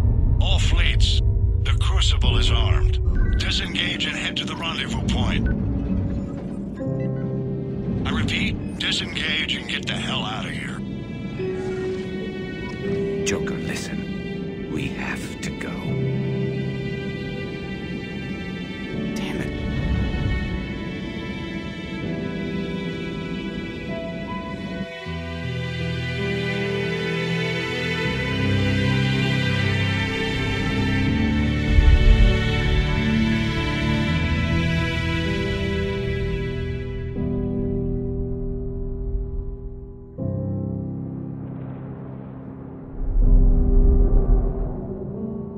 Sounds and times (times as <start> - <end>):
Music: 0.0 - 45.5
Speech: 0.4 - 5.5, 8.1 - 10.8, 13.2 - 14.0, 14.7 - 16.0, 19.2 - 19.5.